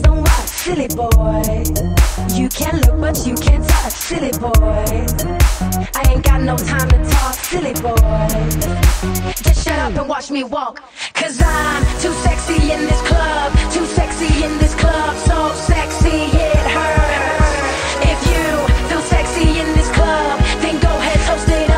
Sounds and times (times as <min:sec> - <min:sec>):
Dubstep: 0:00.0 - 0:10.2, 0:11.4 - 0:21.7.